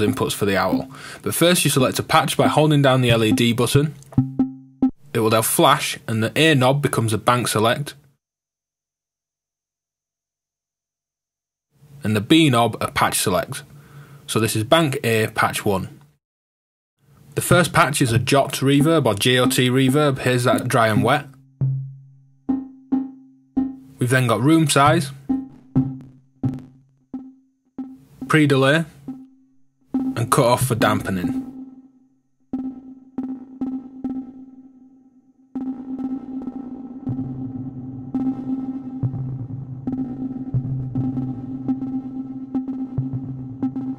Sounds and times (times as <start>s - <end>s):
Speech: 0.0s - 4.0s, 5.1s - 8.0s, 12.0s - 13.7s, 14.3s - 16.0s, 17.4s - 21.3s, 24.0s - 25.2s, 28.3s - 28.9s, 30.2s - 31.4s
Music: 3.2s - 5.0s, 18.7s - 43.9s.